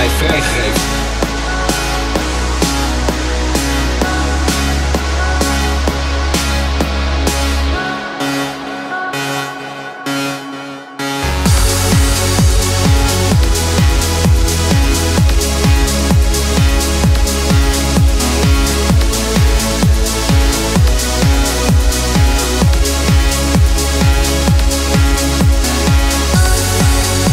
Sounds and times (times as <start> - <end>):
Music: 0.0 - 27.3.